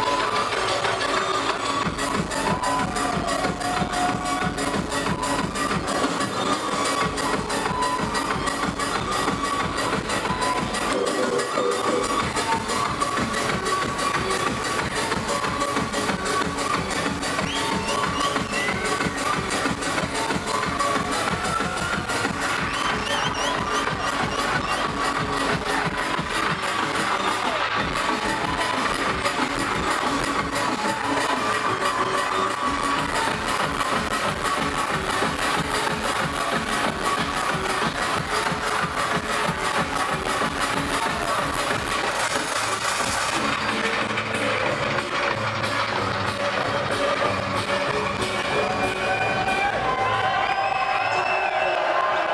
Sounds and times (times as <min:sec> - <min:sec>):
Music: 0:00.0 - 0:52.3.